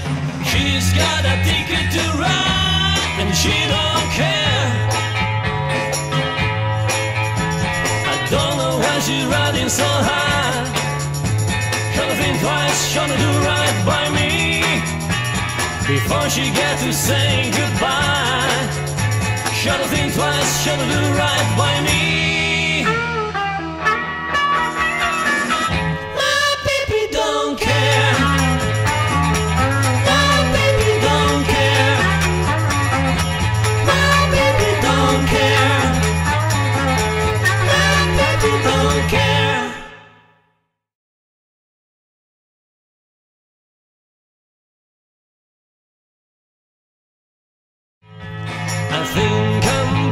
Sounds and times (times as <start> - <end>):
Jingle (music): 0.0 - 26.4, 27.6 - 40.1, 48.1 - 50.1
Guitar: 0.0 - 40.4, 48.0 - 50.1
Singing: 0.4 - 4.9, 8.1 - 10.7, 11.9 - 14.9, 15.9 - 18.8, 19.5 - 23.0, 26.1 - 28.6, 30.0 - 32.3, 33.8 - 36.2, 37.4 - 40.1, 48.9 - 50.1
Jingle bell: 1.0 - 22.1, 27.7 - 39.6, 48.5 - 50.1.